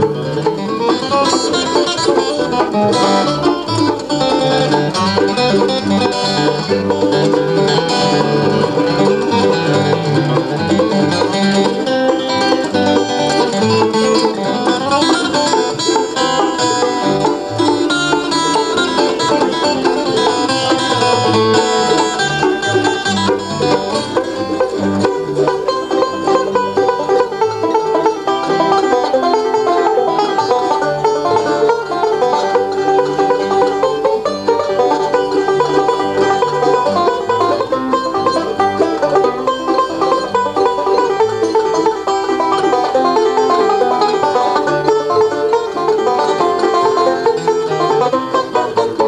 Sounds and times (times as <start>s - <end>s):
Banjo: 0.0s - 49.0s
Bluegrass: 0.0s - 49.0s
Guitar: 0.0s - 49.0s.